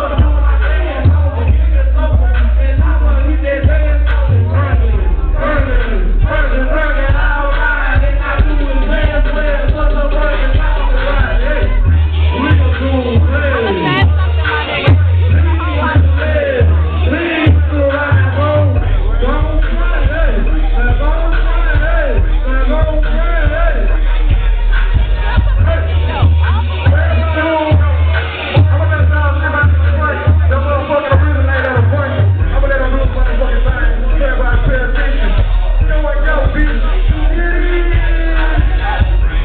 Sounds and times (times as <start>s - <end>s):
Music: 0.0s - 39.4s
Speech: 0.0s - 39.4s.